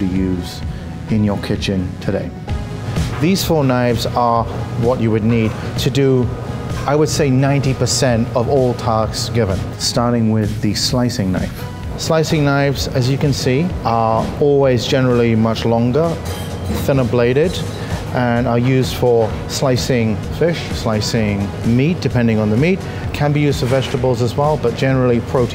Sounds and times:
Speech: 0.0 - 2.4, 3.2 - 25.5
Music: 0.0 - 25.5.

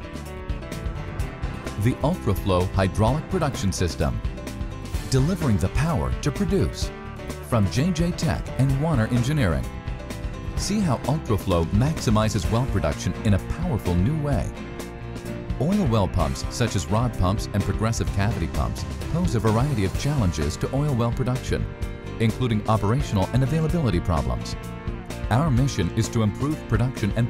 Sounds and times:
Music: 0.0 - 27.2
Speech: 1.8 - 4.2, 5.1 - 6.9, 7.5 - 9.7, 10.6 - 14.5, 15.6 - 24.6, 25.3 - 27.2.

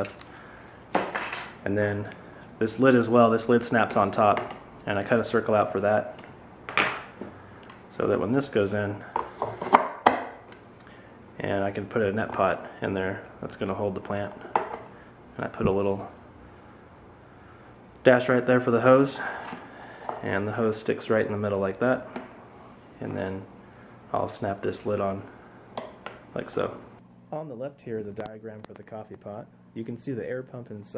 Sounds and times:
Speech: 1.6 - 6.2, 7.9 - 9.1, 11.4 - 14.4, 15.4 - 16.2, 18.0 - 19.3, 20.2 - 22.1, 23.0 - 23.5, 24.1 - 25.3, 26.4 - 30.9.

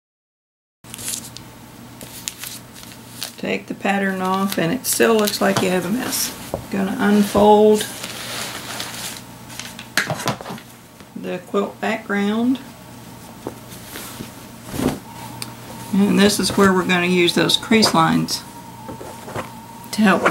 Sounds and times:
Speech: 3.4 - 7.9, 11.2 - 12.7, 15.9 - 18.5, 19.9 - 20.3.

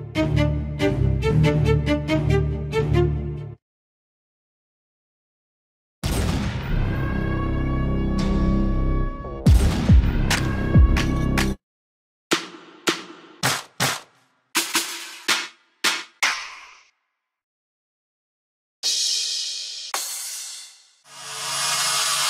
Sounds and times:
Drum machine: 9.5 - 11.1.

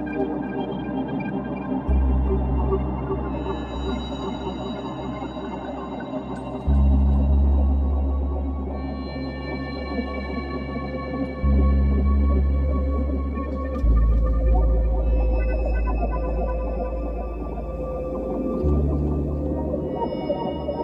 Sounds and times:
Music: 0.0 - 20.8.

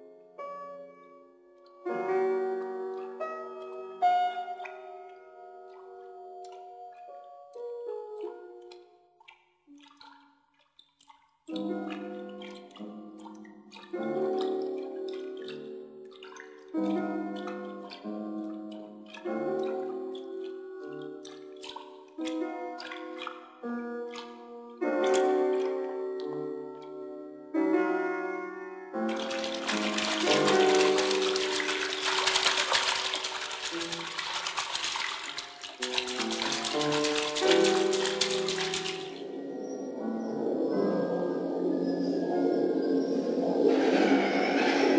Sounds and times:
Music: 0.0 - 44.9
Inside, large room or hall: 29.2 - 39.2.

